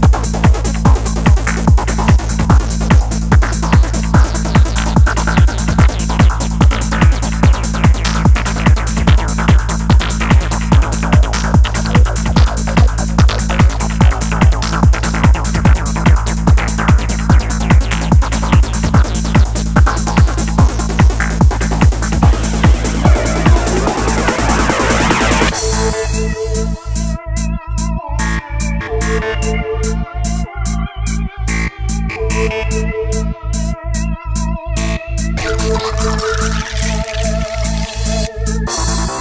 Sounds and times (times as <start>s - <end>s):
Trance music: 0.0s - 39.2s.